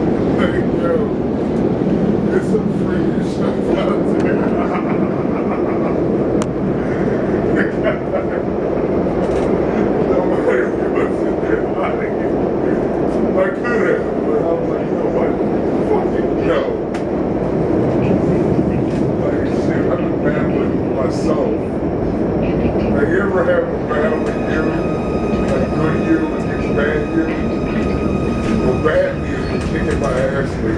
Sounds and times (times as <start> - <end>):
Speech: 0.3 - 1.2, 2.3 - 4.8, 9.8 - 16.8, 17.9 - 21.7, 22.4 - 30.7.